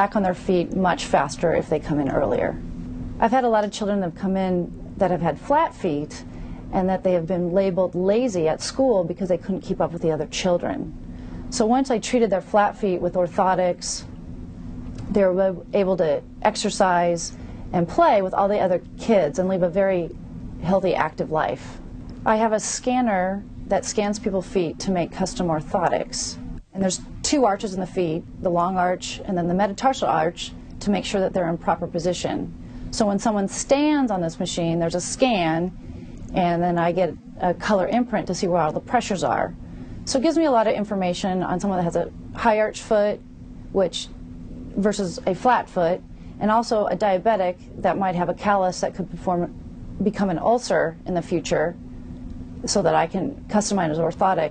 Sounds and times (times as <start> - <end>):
Speech: 0.0 - 2.6, 3.2 - 14.1, 15.0 - 43.2, 43.8 - 44.2, 44.8 - 51.8, 52.7 - 54.5
Inside, small room: 0.0 - 54.5.